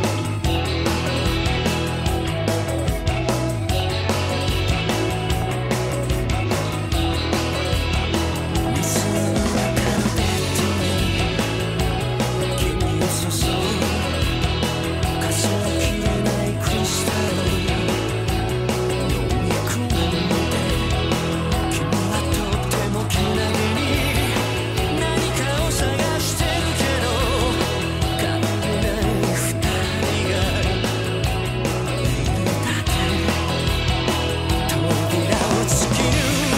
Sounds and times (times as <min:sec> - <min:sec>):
Music: 0:00.0 - 0:36.5.